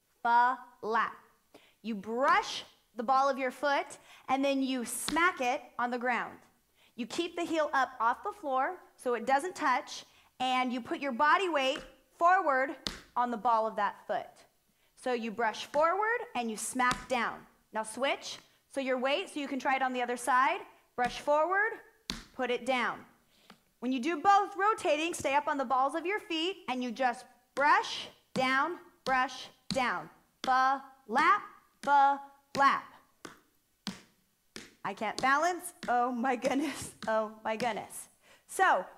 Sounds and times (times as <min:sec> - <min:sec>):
Speech: 0:00.2 - 0:01.2, 0:01.9 - 0:06.4, 0:07.0 - 0:14.4, 0:15.0 - 0:21.8, 0:22.4 - 0:23.1, 0:23.8 - 0:33.0, 0:34.9 - 0:38.9.